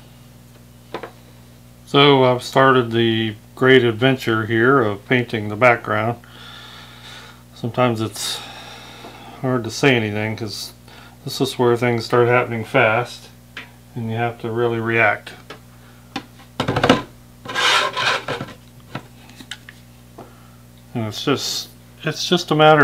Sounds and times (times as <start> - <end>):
Inside, small room: 0.0 - 22.8
Speech: 1.9 - 6.2, 7.6 - 8.4, 9.4 - 15.4, 20.9 - 22.8.